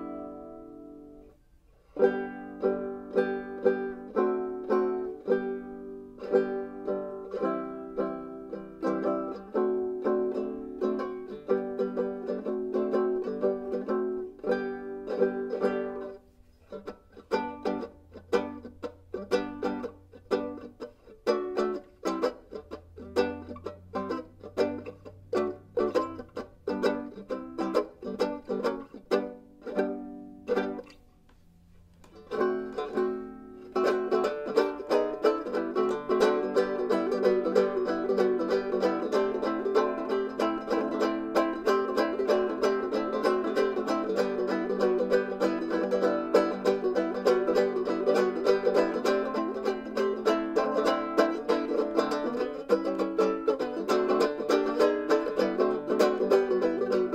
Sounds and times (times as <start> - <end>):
Banjo: 0.0 - 57.1
Guitar: 0.0 - 57.1
Mandolin: 0.0 - 57.1.